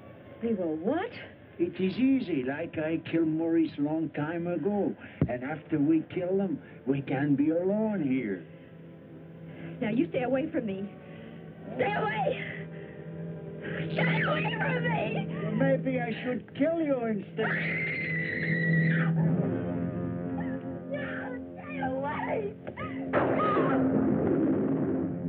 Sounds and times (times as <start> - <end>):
Music: 0.0 - 25.2.